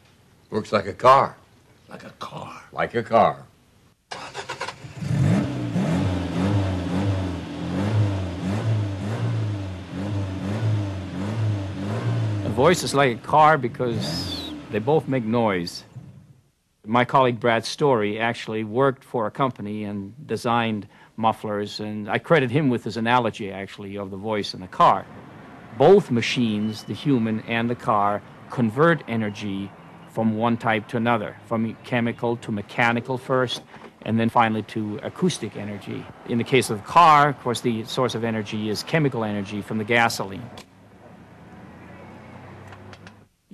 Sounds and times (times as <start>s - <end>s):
Speech: 0.5s - 3.5s, 12.5s - 15.9s, 16.9s - 25.1s, 25.8s - 40.6s
Car: 4.1s - 16.3s, 24.5s - 31.9s, 33.4s - 43.4s.